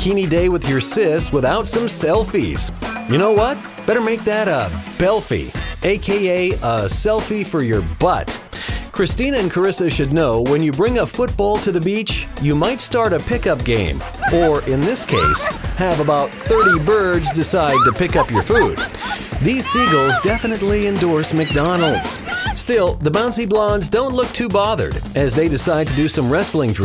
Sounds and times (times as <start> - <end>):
Music: 0.0 - 26.8
Speech: 0.0 - 26.8.